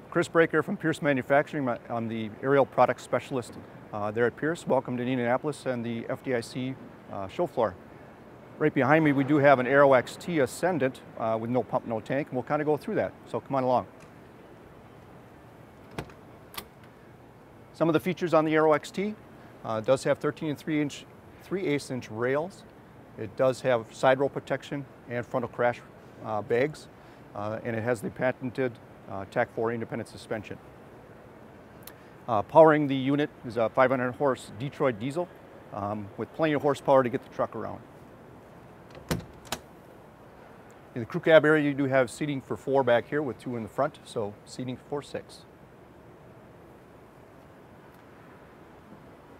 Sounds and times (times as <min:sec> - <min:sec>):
Speech: 0:00.1 - 0:07.8, 0:08.6 - 0:13.9, 0:17.7 - 0:30.6, 0:32.3 - 0:37.9, 0:41.0 - 0:45.5.